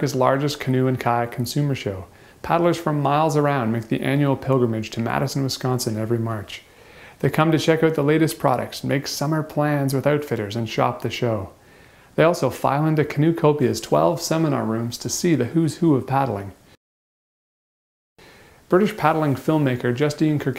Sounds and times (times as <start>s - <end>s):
Speech: 0.0s - 11.6s, 12.2s - 16.6s, 18.7s - 20.5s
Inside, small room: 0.0s - 16.8s, 18.2s - 20.5s.